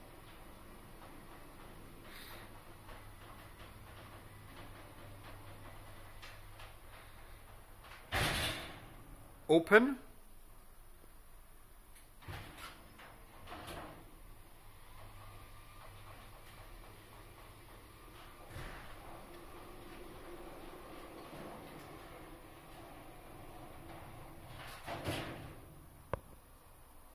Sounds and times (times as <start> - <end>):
Sliding door: 0.0 - 9.5, 12.0 - 27.1.